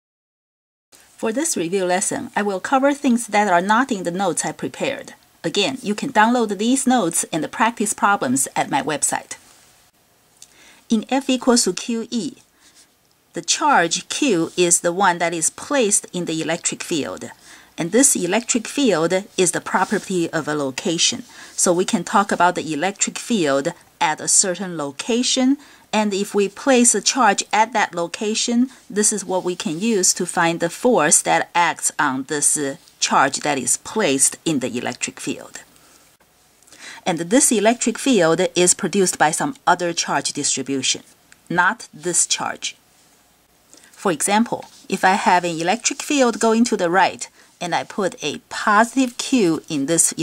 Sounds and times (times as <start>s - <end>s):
Speech: 1.2s - 9.4s, 10.9s - 12.4s, 13.4s - 35.7s, 37.0s - 42.8s, 44.0s - 50.2s.